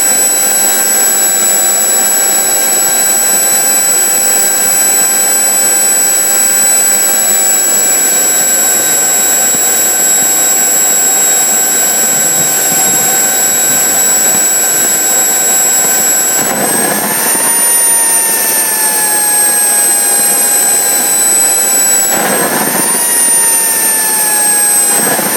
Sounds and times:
Medium engine (mid frequency): 0:00.0 - 0:25.3.

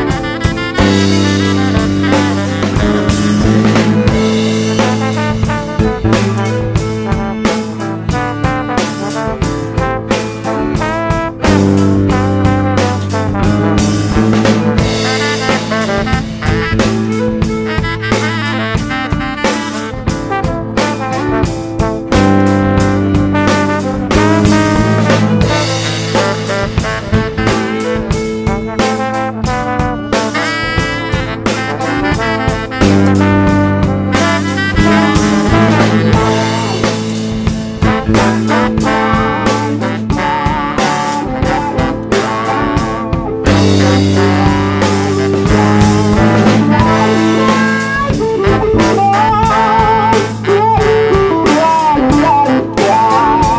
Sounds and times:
Music: 0:00.0 - 0:53.5.

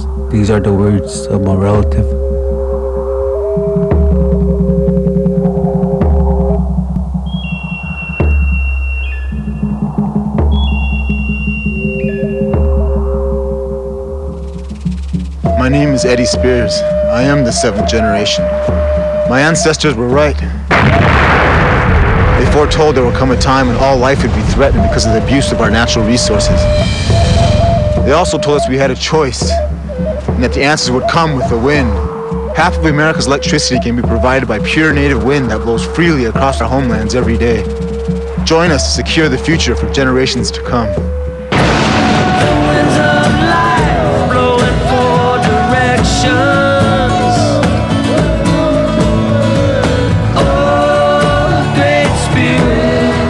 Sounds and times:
Music: 0:00.0 - 0:53.2
Speech: 0:00.3 - 0:02.2, 0:15.6 - 0:18.4, 0:19.3 - 0:20.5, 0:22.4 - 0:26.7, 0:28.1 - 0:29.6, 0:30.4 - 0:32.0, 0:32.6 - 0:37.7, 0:38.5 - 0:41.0.

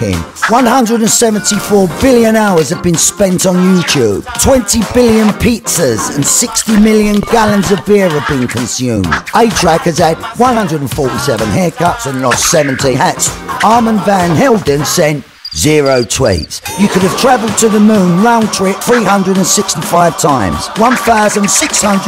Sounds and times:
Music: 0:00.0 - 0:22.0
Speech: 0:00.0 - 0:22.0.

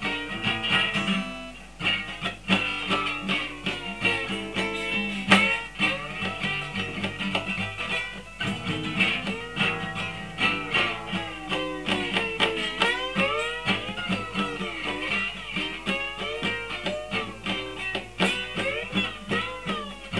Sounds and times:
Guitar: 0:00.0 - 0:20.1.

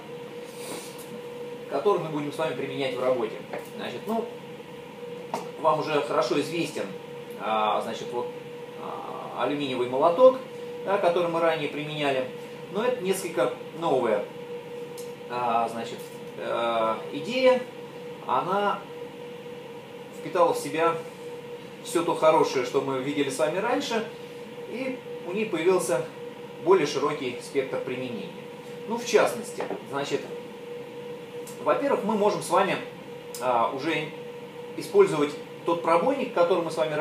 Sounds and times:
Speech: 0:01.7 - 0:04.4, 0:05.6 - 0:14.3, 0:15.3 - 0:18.9, 0:20.2 - 0:21.0, 0:21.8 - 0:24.1, 0:24.7 - 0:30.4, 0:31.5 - 0:34.2, 0:34.8 - 0:37.0.

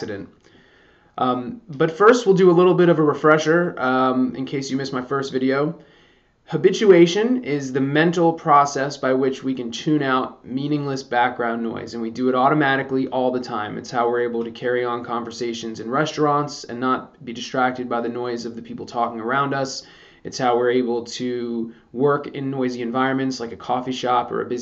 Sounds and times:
Speech: 0:00.0 - 0:00.4, 0:01.2 - 0:05.8, 0:06.5 - 0:24.6.

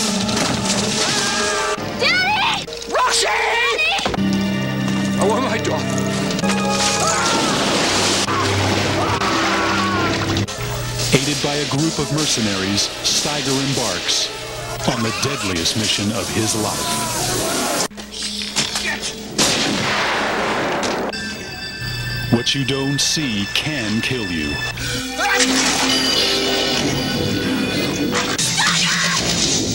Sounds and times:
Music: 0:00.0 - 0:29.7
Speech: 0:11.1 - 0:17.3, 0:22.3 - 0:24.6.

